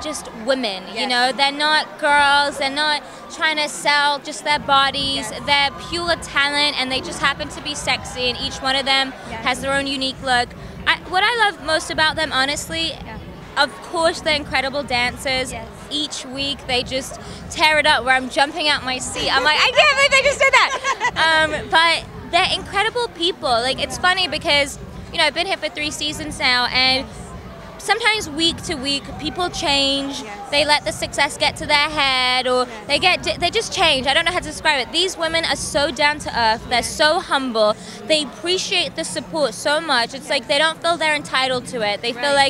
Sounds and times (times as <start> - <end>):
Speech: 0.0 - 27.1, 27.8 - 42.4.